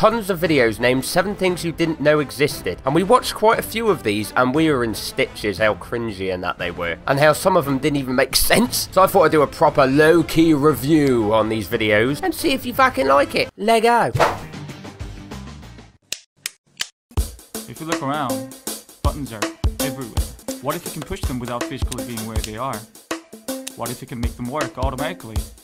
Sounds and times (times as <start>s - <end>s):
Music: 0.0s - 13.6s, 14.2s - 16.0s, 17.1s - 25.6s
Speech: 0.0s - 14.2s, 17.7s - 18.4s, 19.0s - 22.9s, 23.8s - 25.5s.